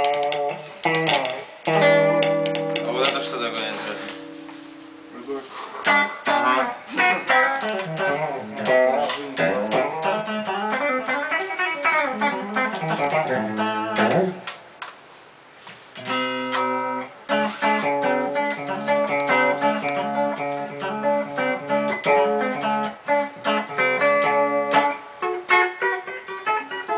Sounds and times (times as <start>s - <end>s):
Music: 0.0s - 14.5s, 16.0s - 26.9s.